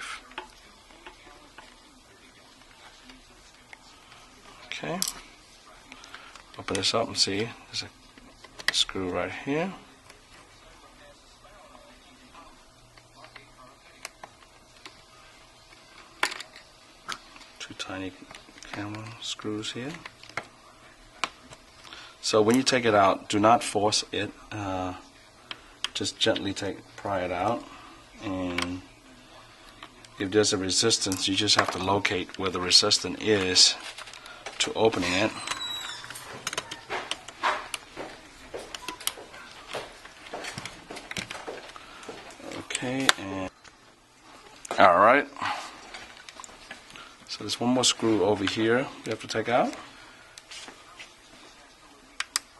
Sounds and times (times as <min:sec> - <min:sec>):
Speech: 0:00.0 - 0:15.5, 0:17.6 - 0:35.8, 0:42.3 - 0:43.5, 0:44.7 - 0:45.6, 0:47.3 - 0:49.9
Inside, small room: 0:00.0 - 0:52.5.